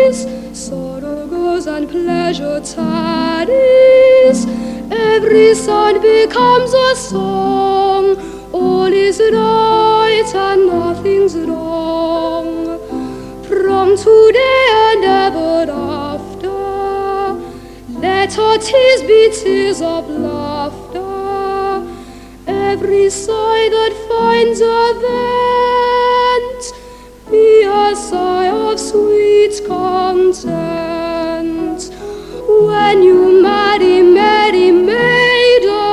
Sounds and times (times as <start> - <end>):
Music: 0.0 - 35.9.